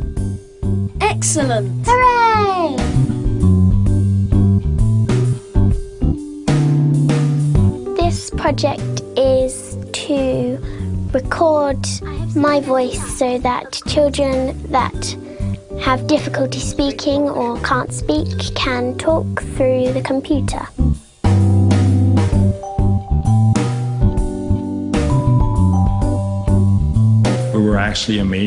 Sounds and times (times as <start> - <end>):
Music: 0.0 - 28.4
Speech: 1.0 - 2.8, 11.2 - 15.2, 15.8 - 20.7, 27.6 - 28.4.